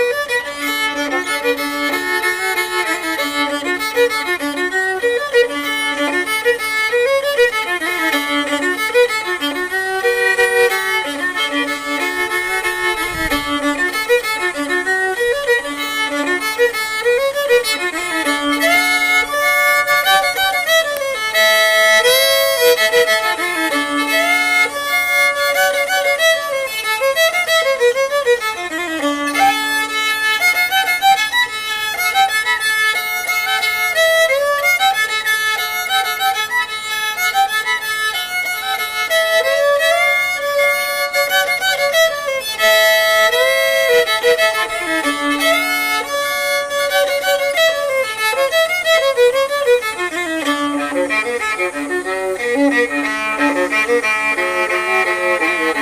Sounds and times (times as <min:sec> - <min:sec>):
Violin, fiddle: 0:00.0 - 0:55.8.